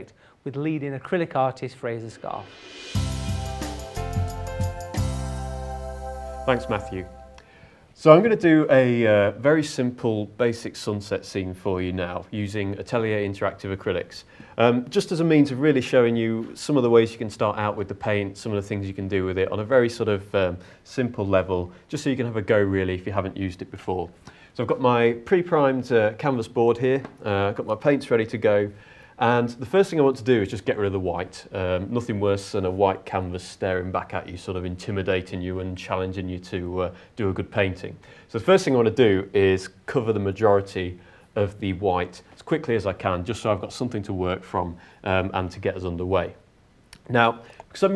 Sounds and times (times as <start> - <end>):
Speech: 0.0 - 2.6, 6.5 - 7.1, 8.0 - 47.9.